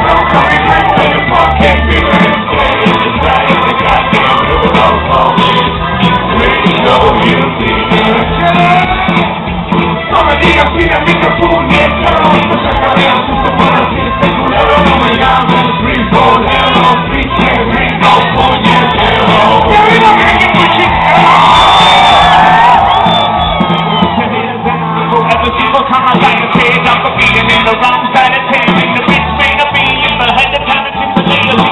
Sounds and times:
Cheering: 0:00.0 - 0:31.7
Crowd: 0:00.0 - 0:31.7.

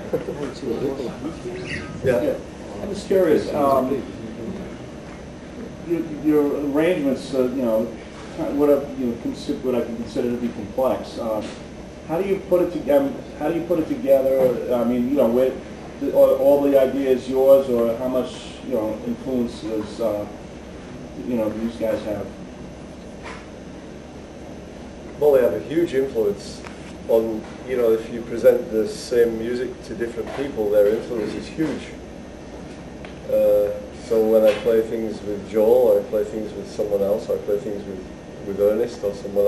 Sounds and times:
Speech: 0:00.1 - 0:04.8, 0:05.6 - 0:20.4, 0:21.2 - 0:22.4, 0:25.2 - 0:32.0, 0:33.2 - 0:39.4.

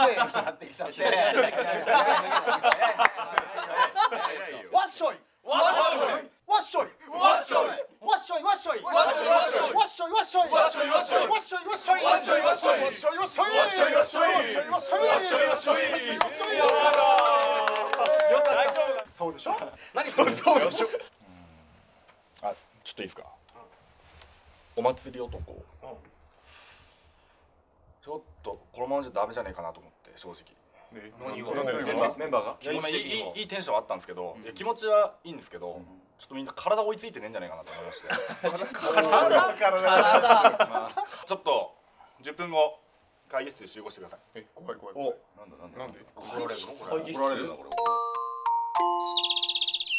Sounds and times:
Speech: 0:00.0 - 0:02.1, 0:03.8 - 0:21.1, 0:22.4 - 0:23.7, 0:24.8 - 0:26.1, 0:28.0 - 0:47.8
Music: 0:47.7 - 0:49.9.

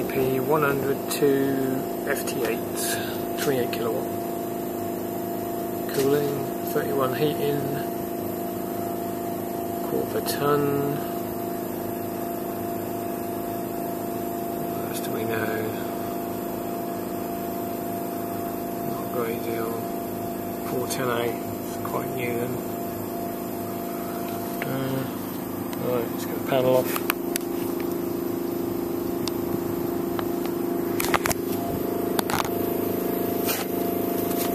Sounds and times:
Speech: 0:00.0 - 0:04.1, 0:05.9 - 0:07.9, 0:09.8 - 0:11.1, 0:14.7 - 0:15.9, 0:18.8 - 0:19.9, 0:20.7 - 0:22.6, 0:24.6 - 0:25.2, 0:25.8 - 0:27.0.

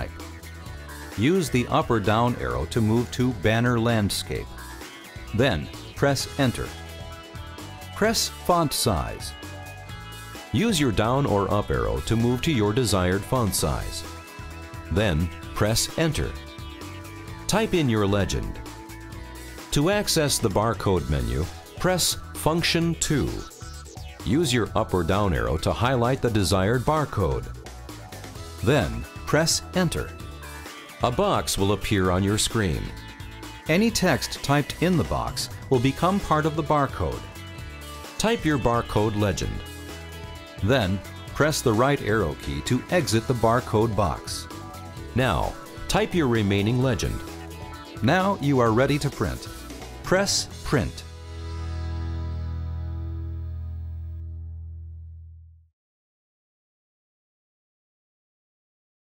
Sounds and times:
Speech: 0:00.0 - 0:00.2, 0:01.2 - 0:04.5, 0:05.3 - 0:06.8, 0:08.0 - 0:09.3, 0:10.5 - 0:14.1, 0:14.9 - 0:16.4, 0:17.5 - 0:18.6, 0:19.7 - 0:23.5, 0:24.2 - 0:27.5, 0:28.6 - 0:30.1, 0:31.0 - 0:33.0, 0:33.7 - 0:37.3, 0:38.2 - 0:39.6, 0:40.6 - 0:44.5, 0:45.2 - 0:47.3, 0:48.0 - 0:51.1
Music: 0:00.0 - 0:55.7.

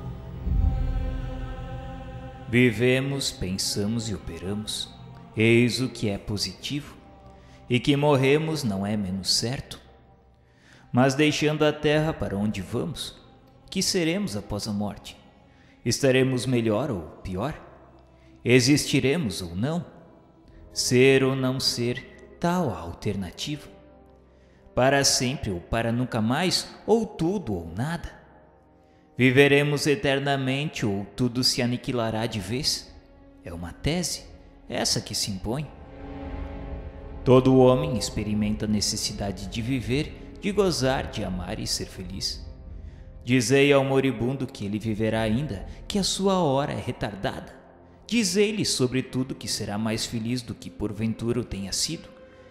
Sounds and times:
Music: 0:00.0 - 0:52.5
Speech: 0:02.5 - 0:07.0, 0:07.7 - 0:09.9, 0:10.9 - 0:15.2, 0:15.9 - 0:17.7, 0:18.4 - 0:20.0, 0:20.8 - 0:23.8, 0:24.8 - 0:28.2, 0:29.2 - 0:35.8, 0:37.2 - 0:42.5, 0:43.3 - 0:52.1.

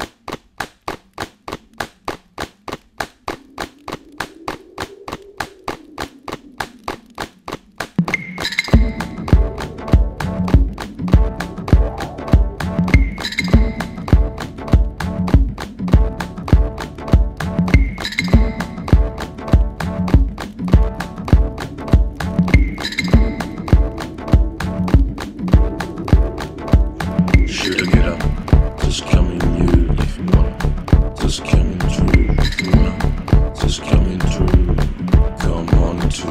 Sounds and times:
Music: 0:08.0 - 0:36.3.

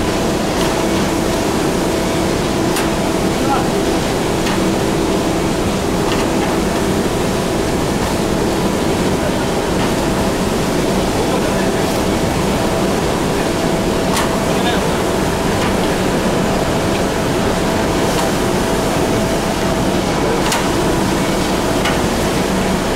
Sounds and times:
Speech: 0:03.3 - 0:04.1, 0:09.0 - 0:12.7, 0:14.2 - 0:15.2, 0:20.0 - 0:20.8.

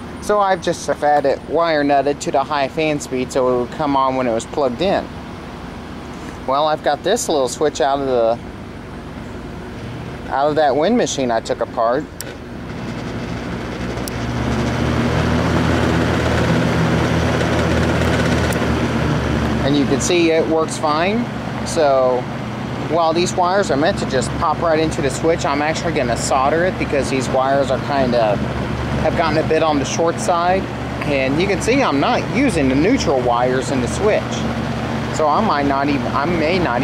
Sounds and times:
Mechanical fan: 0:00.0 - 0:36.8
Speech: 0:00.2 - 0:05.1, 0:06.5 - 0:08.4, 0:10.3 - 0:12.1, 0:19.6 - 0:22.3, 0:22.9 - 0:28.4, 0:29.0 - 0:34.5, 0:35.1 - 0:36.8.

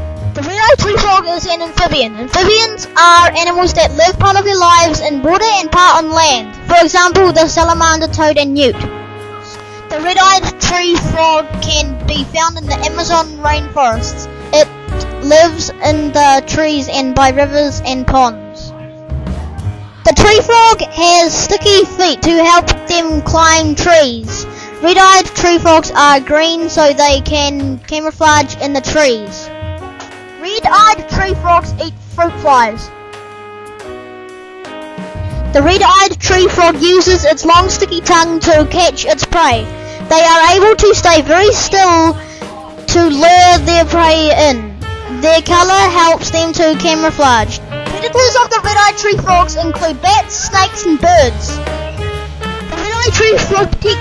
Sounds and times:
Music: 0:00.0 - 0:54.0
Speech: 0:00.4 - 0:08.8, 0:09.9 - 0:18.7, 0:20.1 - 0:29.5, 0:30.4 - 0:32.9, 0:35.6 - 0:51.6, 0:52.8 - 0:54.0.

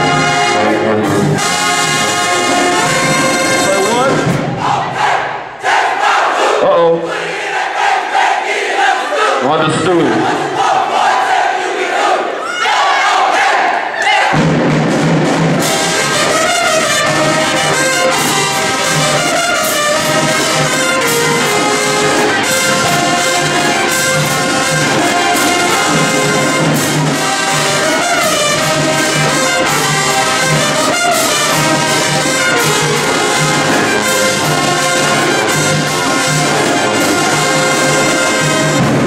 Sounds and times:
Crowd: 0:00.0 - 0:39.0.

